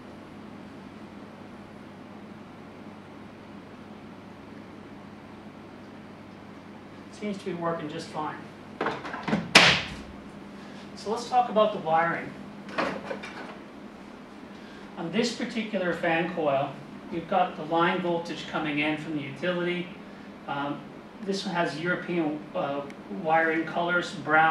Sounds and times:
Speech: 0:07.1 - 0:08.5, 0:11.0 - 0:12.4, 0:15.0 - 0:24.5.

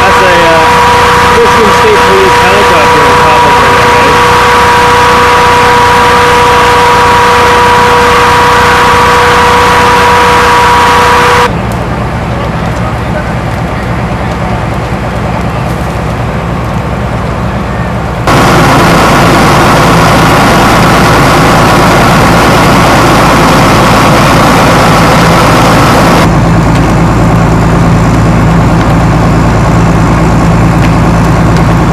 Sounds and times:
Fire: 0:00.0 - 0:31.9.

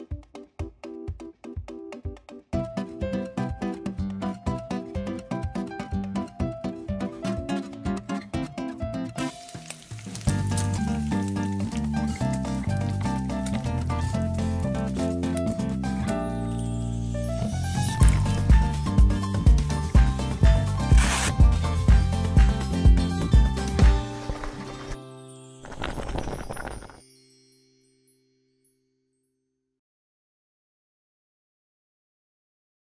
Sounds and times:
Music: 0:00.0 - 0:29.5.

